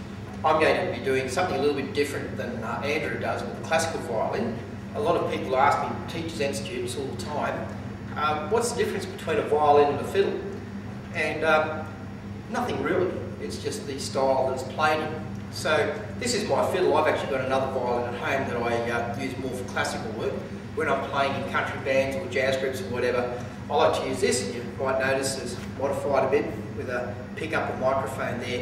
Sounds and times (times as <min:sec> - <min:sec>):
Speech: 0:00.4 - 0:10.5, 0:11.1 - 0:11.9, 0:12.5 - 0:28.6.